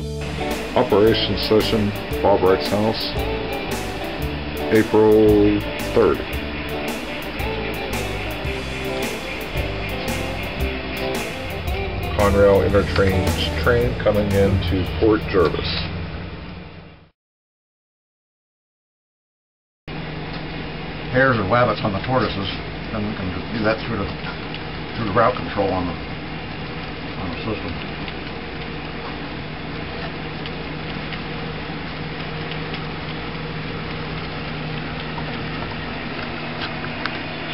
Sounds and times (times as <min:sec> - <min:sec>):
Speech: 0:00.8 - 0:03.2, 0:04.7 - 0:06.3, 0:12.1 - 0:15.9, 0:21.1 - 0:24.3, 0:25.0 - 0:26.0, 0:27.2 - 0:27.8.